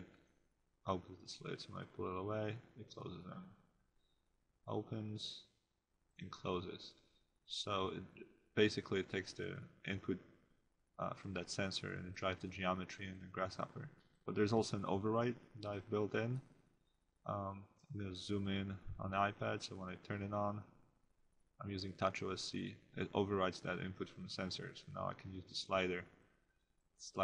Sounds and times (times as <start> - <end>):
Speech: 0.9 - 3.6, 4.7 - 5.5, 6.2 - 10.2, 11.0 - 16.4, 17.3 - 20.8, 21.6 - 26.1.